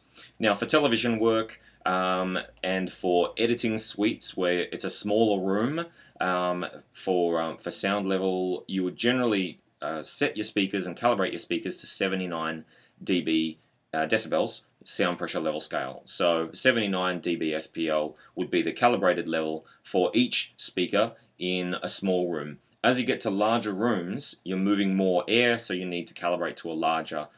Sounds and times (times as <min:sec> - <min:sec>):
Speech: 0:00.0 - 0:27.3.